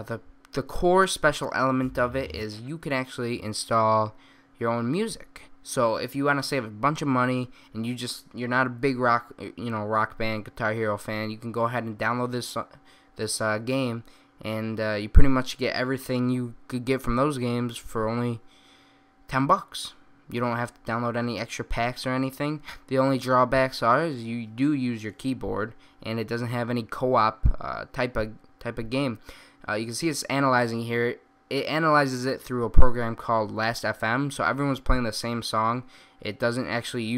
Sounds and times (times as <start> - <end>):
Speech: 0.0 - 18.4, 19.3 - 37.1.